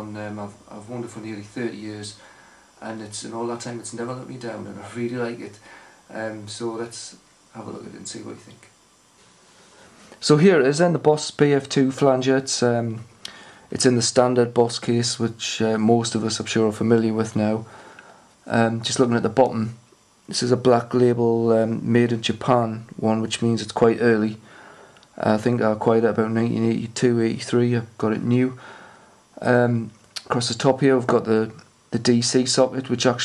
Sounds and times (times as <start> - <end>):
Speech: 0.0 - 2.2, 2.8 - 8.8, 10.2 - 13.1, 13.7 - 17.7, 18.4 - 24.5, 25.2 - 28.6, 29.4 - 33.2.